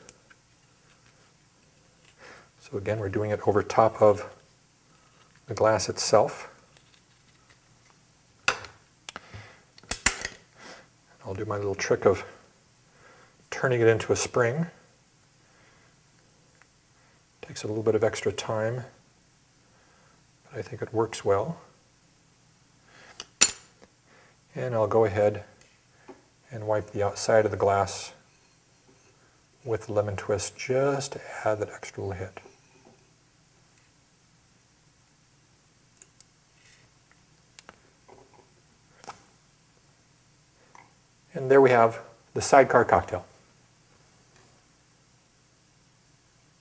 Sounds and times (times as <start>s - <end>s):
Cutlery, silverware: 9.9s - 10.4s, 23.2s - 23.7s.